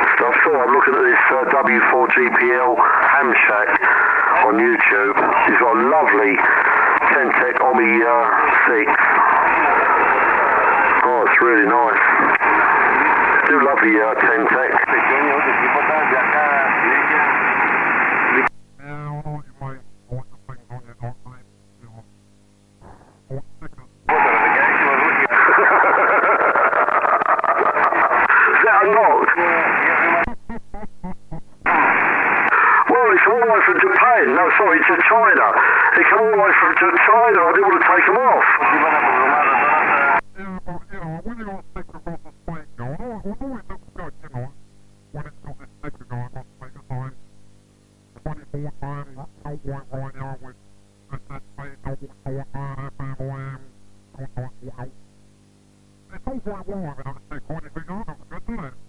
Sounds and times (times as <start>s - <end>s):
Radio: 0.0s - 22.1s, 22.8s - 30.6s, 31.3s - 47.2s, 47.8s - 55.0s, 56.1s - 58.8s
Speech: 0.2s - 3.8s, 4.4s - 9.0s, 13.5s - 17.4s, 18.8s - 22.1s, 23.3s - 25.3s, 32.8s - 44.6s, 45.2s - 47.2s, 48.2s - 55.0s, 56.1s - 58.8s.